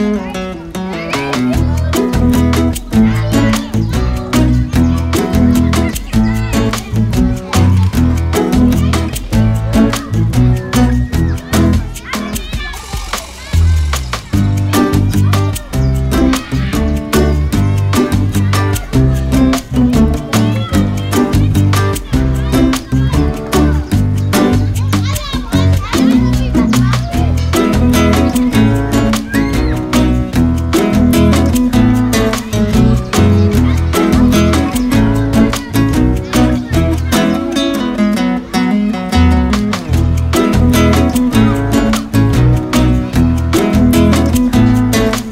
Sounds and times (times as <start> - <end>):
Music: 0.0 - 45.3
Speech: 0.0 - 45.3.